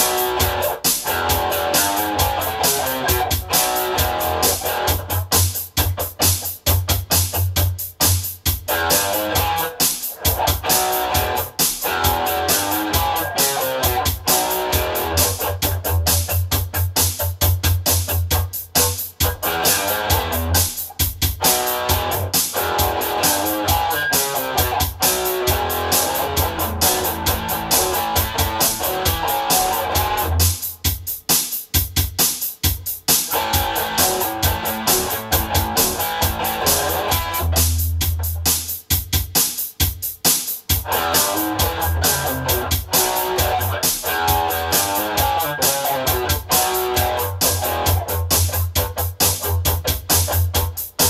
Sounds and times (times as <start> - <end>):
Blues: 0.0 - 39.6, 40.2 - 51.1.